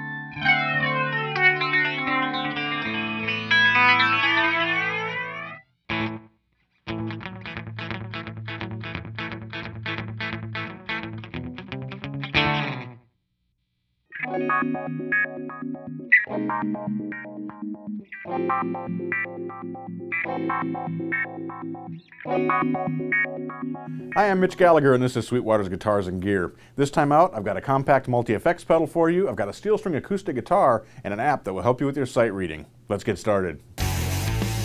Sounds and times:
Music: 0.0s - 13.1s, 14.1s - 24.4s, 33.8s - 34.6s.

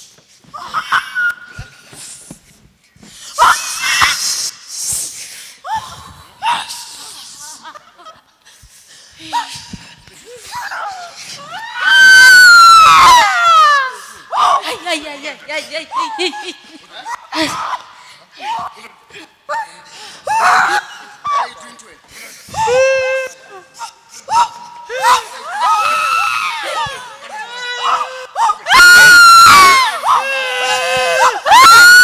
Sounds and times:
Screaming: 3.4s - 4.5s, 10.6s - 14.7s, 24.3s - 32.0s.

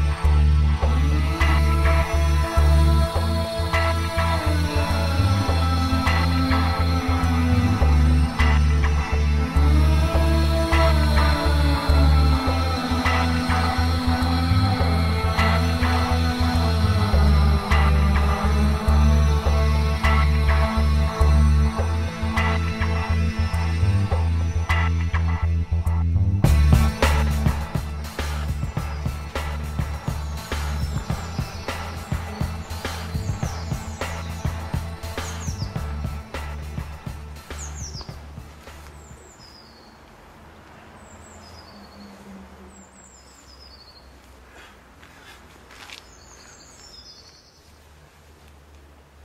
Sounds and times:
Music: 0.0s - 38.9s.

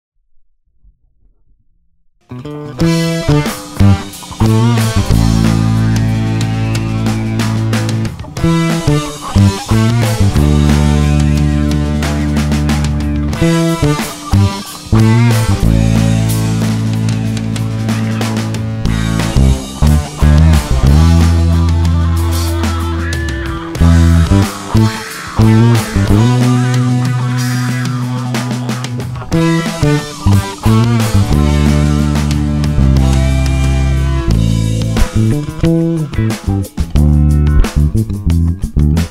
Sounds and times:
Bass guitar: 2.2s - 39.1s.

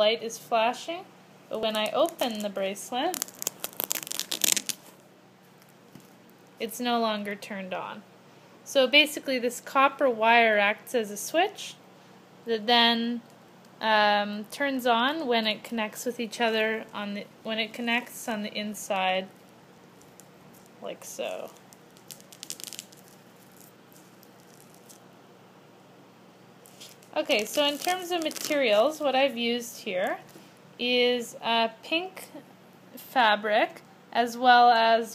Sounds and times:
Speech: 0.0s - 3.2s, 6.6s - 8.0s, 8.7s - 11.8s, 12.5s - 13.2s, 13.8s - 19.3s, 20.8s - 21.6s, 27.2s - 32.4s, 33.0s - 35.1s.

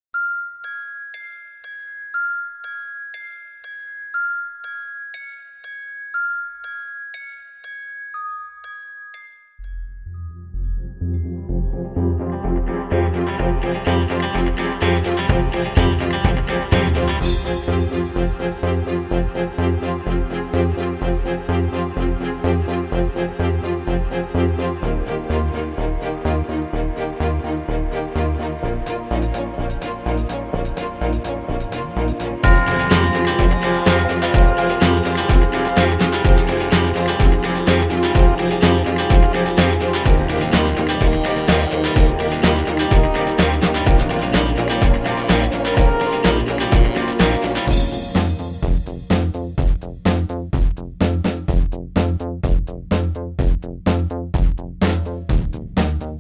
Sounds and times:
Music: 0.2s - 56.2s.

